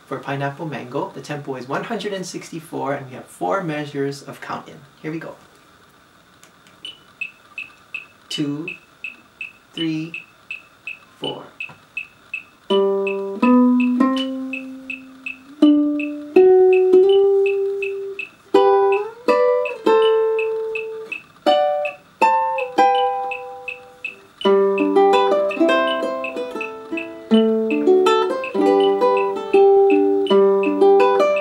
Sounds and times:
Speech: 0:00.1 - 0:05.4, 0:08.3 - 0:08.8, 0:09.8 - 0:10.2, 0:11.2 - 0:11.6
Guitar: 0:12.7 - 0:31.4
Ukulele: 0:12.7 - 0:31.4.

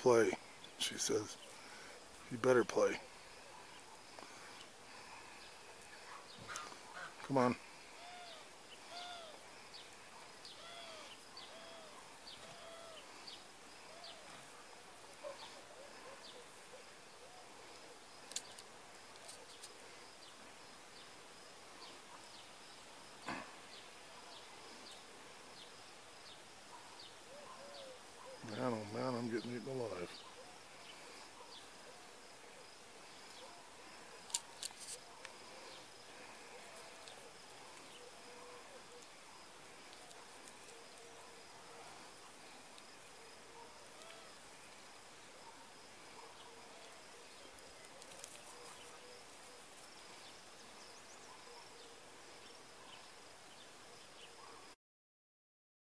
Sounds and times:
Speech: 0:00.0 - 0:01.4, 0:02.3 - 0:03.0, 0:07.2 - 0:07.6, 0:28.4 - 0:30.2
Domestic animals, pets: 0:08.0 - 0:09.4, 0:10.2 - 0:13.1, 0:43.3 - 0:44.4.

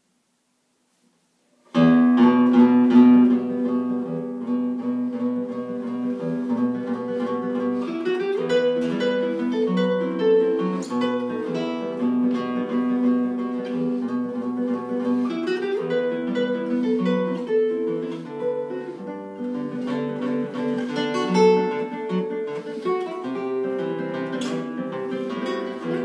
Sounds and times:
Acoustic guitar: 0:00.0 - 0:26.0.

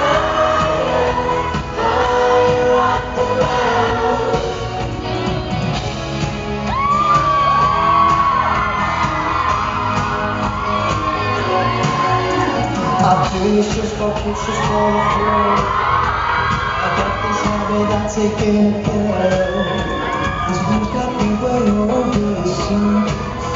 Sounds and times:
Male singing: 0:00.0 - 0:04.8, 0:12.8 - 0:16.0, 0:16.7 - 0:23.5
Music: 0:00.0 - 0:23.5.

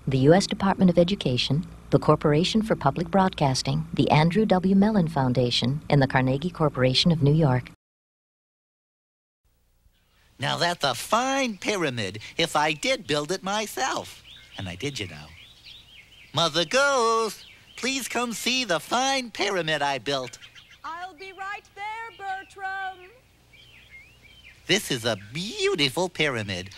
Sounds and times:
Speech: 0:00.1 - 0:07.8, 0:10.4 - 0:15.4, 0:16.4 - 0:23.2, 0:24.7 - 0:26.7.

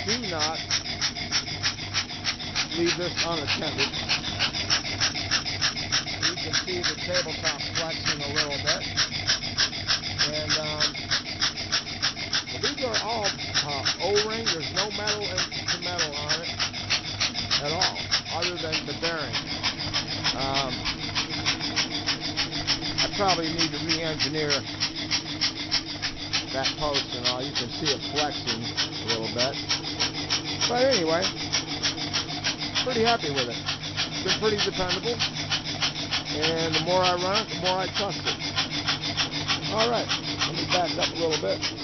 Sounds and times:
Speech: 0:00.0 - 0:00.6, 0:02.7 - 0:04.0, 0:06.2 - 0:08.9, 0:10.2 - 0:11.0, 0:12.5 - 0:16.5, 0:17.6 - 0:19.4, 0:20.4 - 0:20.8, 0:23.0 - 0:24.6, 0:26.5 - 0:29.6, 0:30.6 - 0:31.4, 0:32.8 - 0:33.6, 0:34.2 - 0:35.2, 0:36.3 - 0:38.3, 0:39.7 - 0:41.7
Engine: 0:00.0 - 0:41.8.

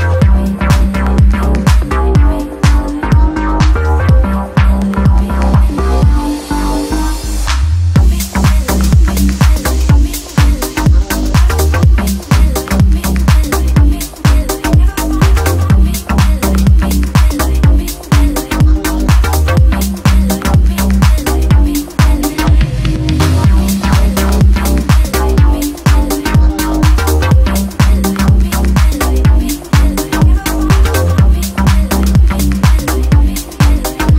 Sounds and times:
Music: 0:00.0 - 0:34.1.

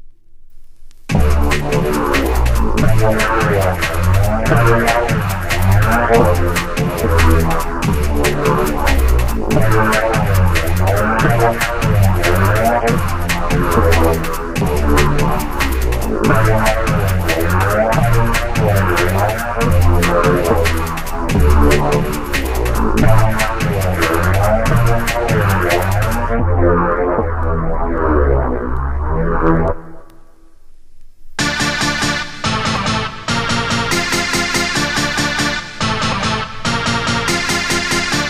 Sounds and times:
Music: 0:00.0 - 0:30.7, 0:31.4 - 0:38.2.

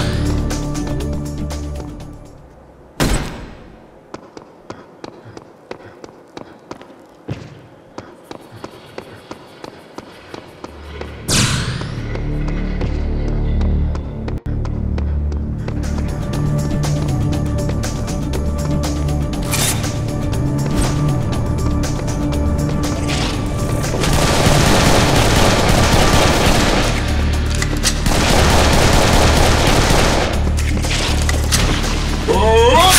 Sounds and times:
Music: 0:00.0 - 0:02.8, 0:10.6 - 0:32.9.

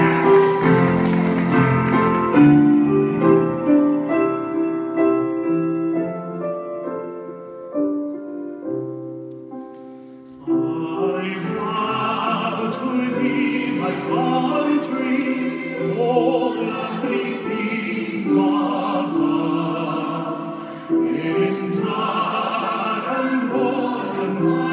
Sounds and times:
Male singing: 0:10.4 - 0:20.4, 0:21.0 - 0:24.7
Choir: 0:10.4 - 0:24.7.

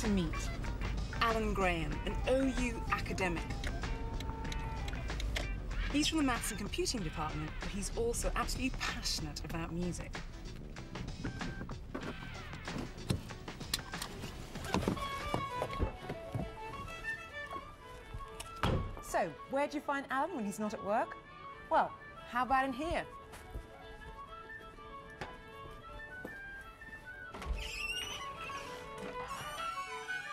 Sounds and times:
Speech: 0:01.2 - 0:03.5, 0:06.0 - 0:10.1, 0:19.0 - 0:21.1.

